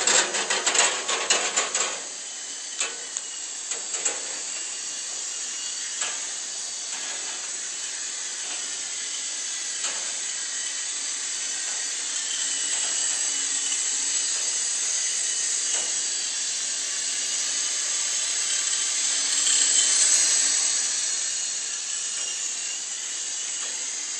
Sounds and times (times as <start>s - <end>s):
Helicopter: 0.0s - 24.1s.